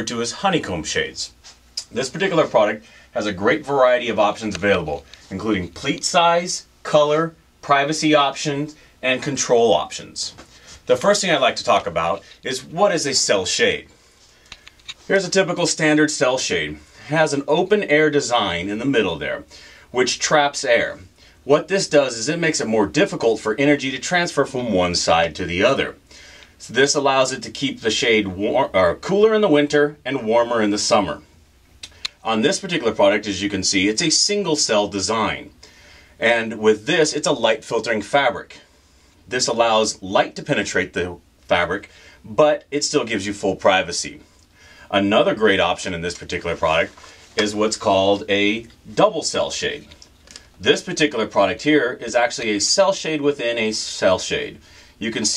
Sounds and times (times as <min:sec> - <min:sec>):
Speech: 0:00.0 - 0:13.9, 0:15.0 - 0:26.0, 0:26.6 - 0:31.3, 0:32.1 - 0:35.6, 0:36.2 - 0:38.7, 0:39.3 - 0:44.3, 0:44.9 - 0:50.0, 0:50.6 - 0:55.3.